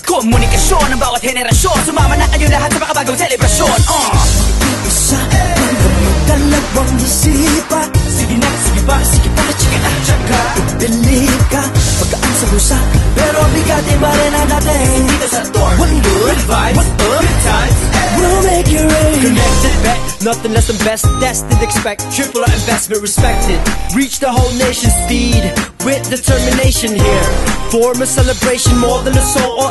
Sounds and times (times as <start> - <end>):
Music: 0.0 - 29.7.